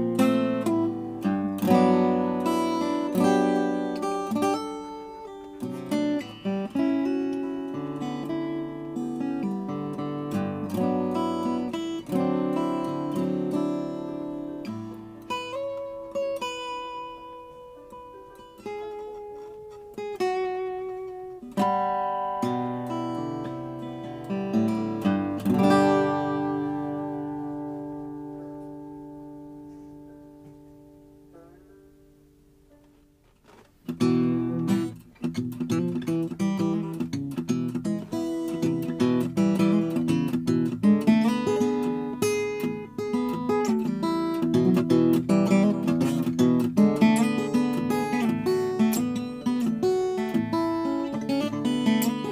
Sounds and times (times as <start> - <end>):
Acoustic guitar: 0.0 - 52.3.